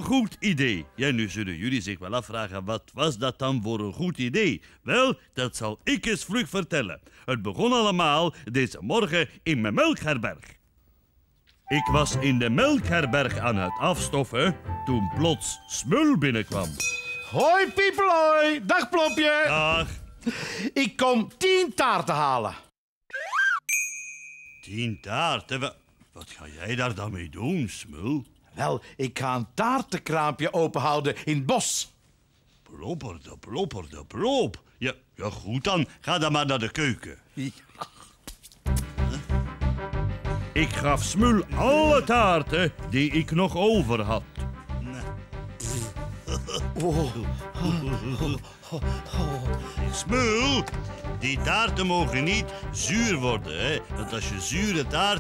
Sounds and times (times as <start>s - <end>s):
Speech: 0.0s - 10.6s, 11.7s - 20.0s, 20.8s - 22.7s, 24.6s - 32.0s, 32.6s - 37.7s, 40.6s - 45.9s, 49.1s - 55.2s.